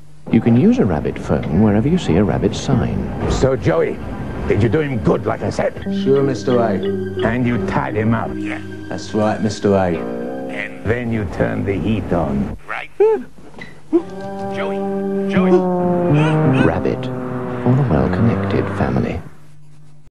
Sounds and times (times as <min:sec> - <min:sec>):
Music: 0:00.3 - 0:12.2, 0:13.9 - 0:19.0
Speech: 0:00.3 - 0:13.3, 0:14.6 - 0:17.1, 0:17.7 - 0:19.3.